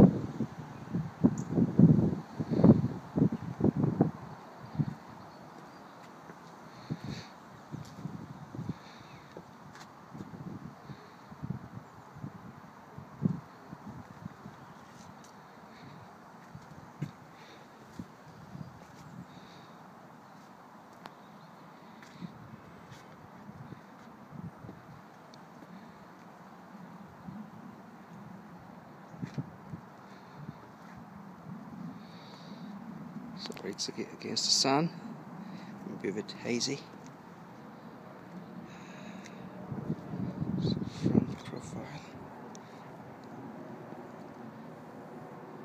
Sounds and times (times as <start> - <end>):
Speech: 33.4 - 35.0, 35.8 - 36.9, 40.7 - 42.2.